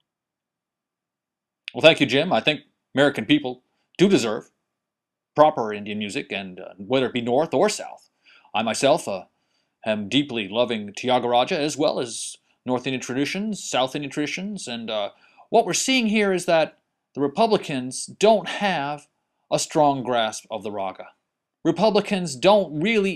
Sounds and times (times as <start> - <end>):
Speech: 1.7 - 4.5, 5.4 - 23.1.